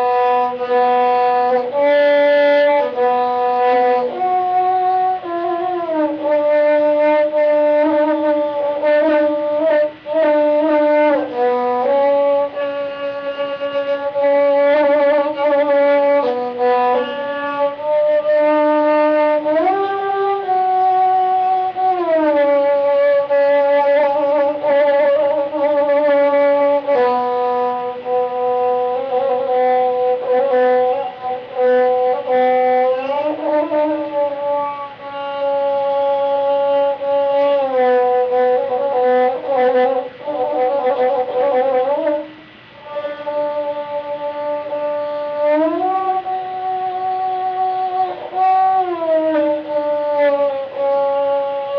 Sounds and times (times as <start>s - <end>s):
Inside, small room: 0.0s - 51.7s
Violin, fiddle: 2.8s - 26.3s.